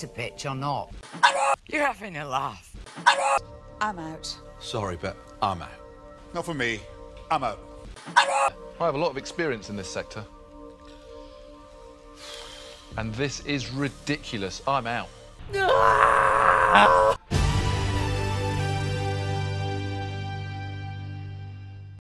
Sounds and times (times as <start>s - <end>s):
Music: 0.0s - 22.0s.